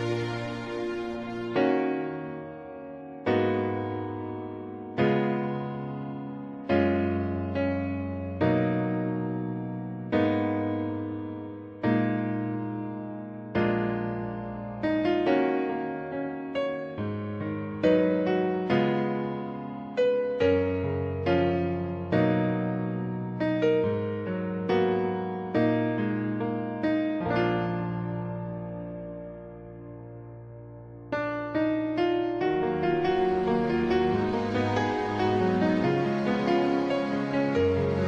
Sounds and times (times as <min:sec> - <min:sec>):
Music: 0:00.0 - 0:38.0.